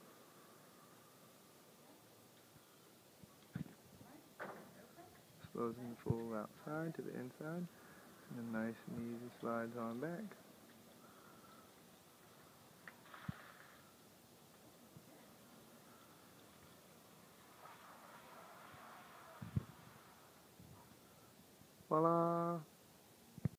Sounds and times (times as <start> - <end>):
Speech: 4.0 - 7.7, 8.3 - 10.4, 21.9 - 22.7
Sliding door: 16.5 - 20.5.